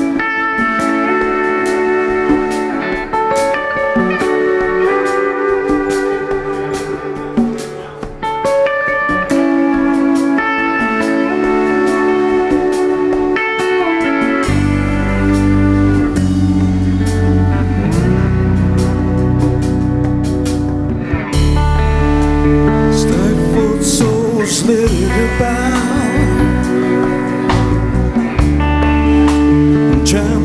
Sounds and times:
Guitar: 0.0 - 30.4.

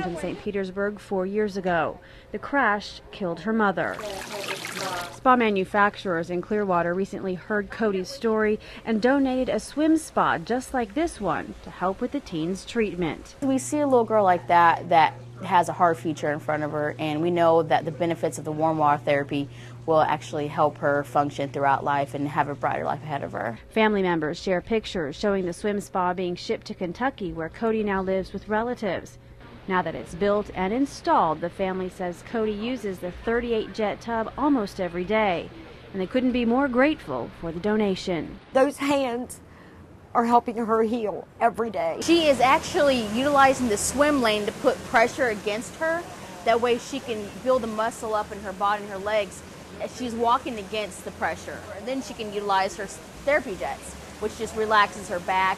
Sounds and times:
Speech: 0.0 - 39.4, 40.2 - 55.5.

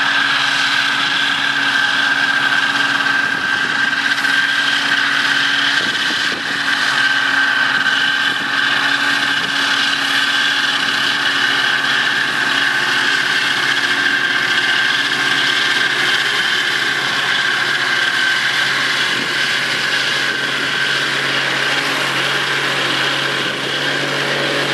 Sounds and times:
Vehicle: 0.0 - 24.7.

